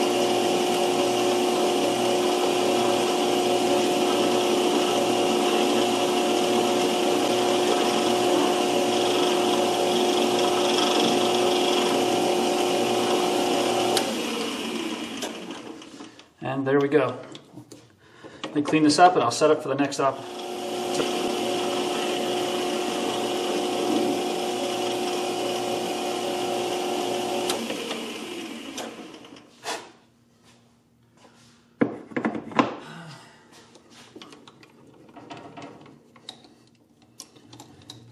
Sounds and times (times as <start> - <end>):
Tools: 34.2 - 38.1.